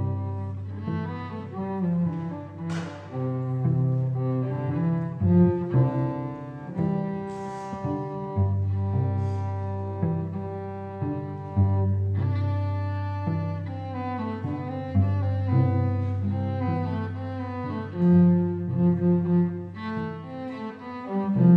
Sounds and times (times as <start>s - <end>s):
Cello: 0.0s - 21.5s.